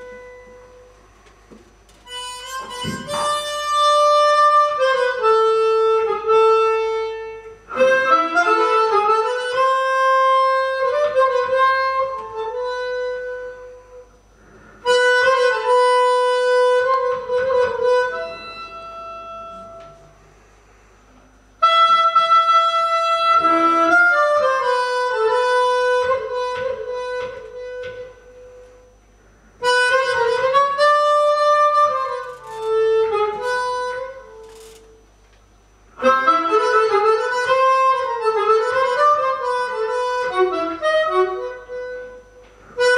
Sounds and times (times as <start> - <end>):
Wind instrument, woodwind instrument: 0.0 - 0.9, 2.0 - 14.2, 14.8 - 20.2, 21.6 - 29.0, 29.6 - 34.8, 36.0 - 42.9
Harmonica: 2.0 - 20.2, 21.6 - 35.1, 35.9 - 42.9.